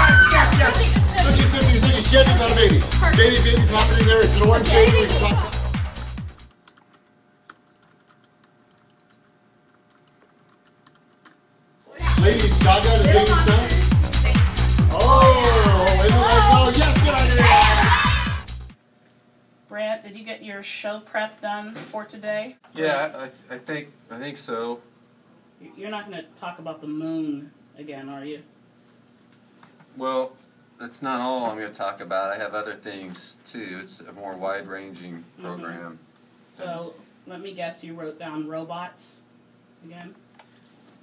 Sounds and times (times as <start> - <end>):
Music: 0.0 - 6.5, 12.0 - 18.8
Speech: 11.9 - 13.8, 14.9 - 18.0.